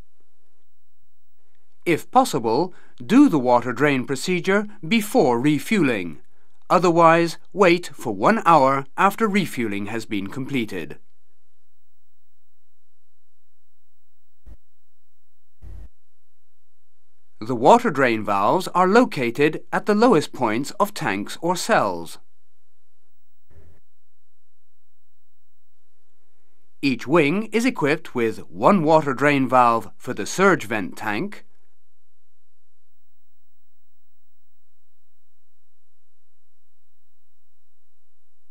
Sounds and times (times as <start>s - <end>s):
Speech: 1.9s - 11.0s, 17.4s - 22.2s, 26.8s - 31.5s.